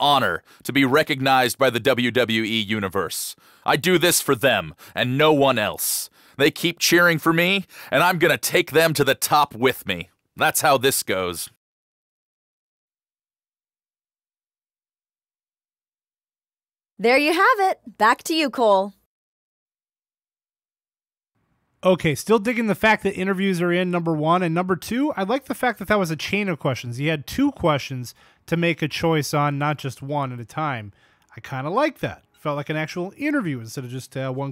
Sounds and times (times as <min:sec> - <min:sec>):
Speech: 0:00.0 - 0:11.6, 0:17.0 - 0:19.0, 0:21.8 - 0:34.5.